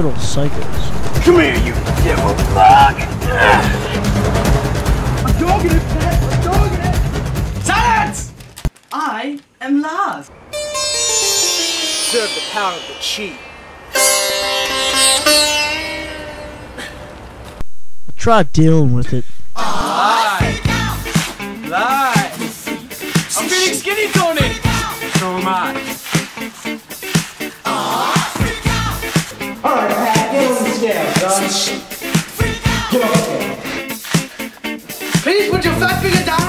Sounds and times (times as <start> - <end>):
Sitar: 10.4 - 17.2.